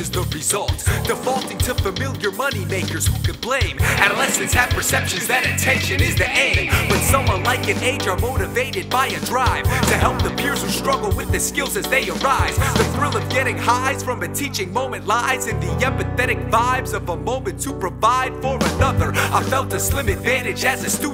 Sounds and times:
Pop music: 0.0s - 21.1s.

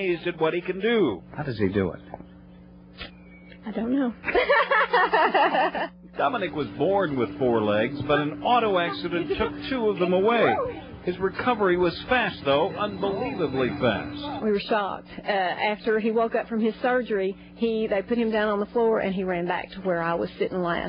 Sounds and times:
Speech: 6.2s - 20.8s.

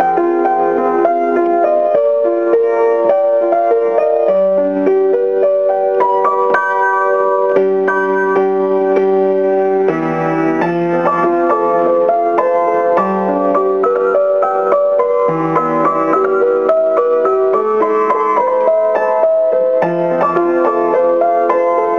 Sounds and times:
Music: 0.0s - 21.9s.

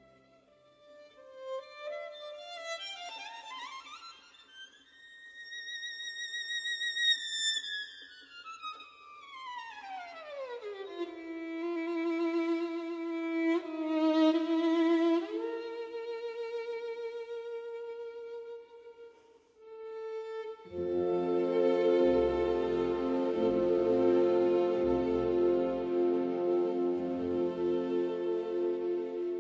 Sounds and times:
Bowed string instrument: 0.0s - 29.4s.

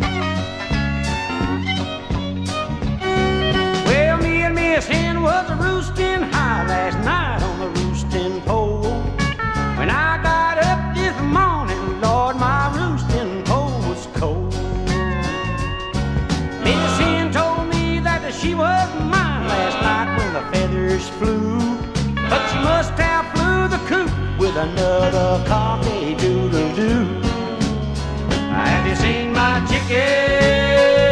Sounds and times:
Music: 0.0s - 31.1s.

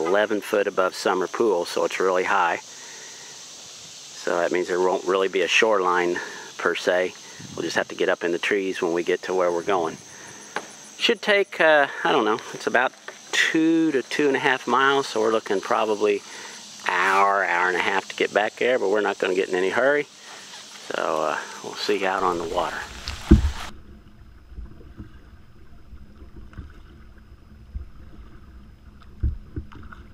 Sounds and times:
Speech: 0.0s - 2.6s, 4.2s - 10.0s, 11.0s - 16.2s, 16.8s - 20.1s, 20.9s - 22.9s.

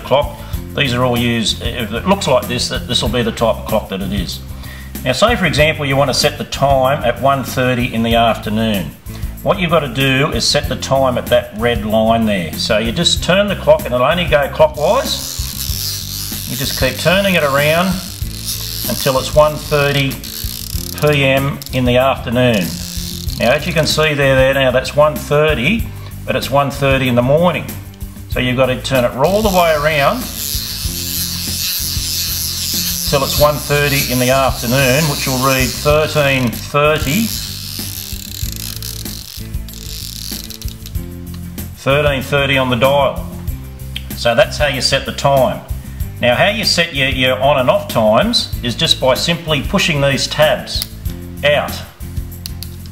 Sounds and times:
Speech: 0.0s - 4.4s, 5.0s - 15.2s, 16.5s - 18.1s, 18.9s - 20.2s, 21.0s - 22.7s, 23.4s - 30.4s, 33.1s - 37.4s, 41.8s - 43.3s, 44.2s - 51.9s
Music: 0.0s - 52.9s.

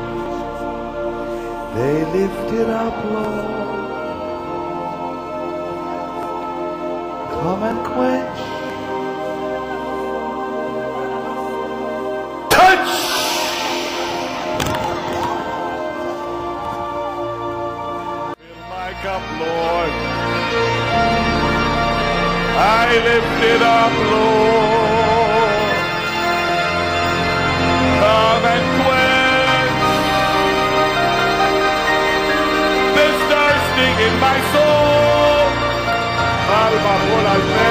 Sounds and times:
Music: 0.0s - 37.7s.

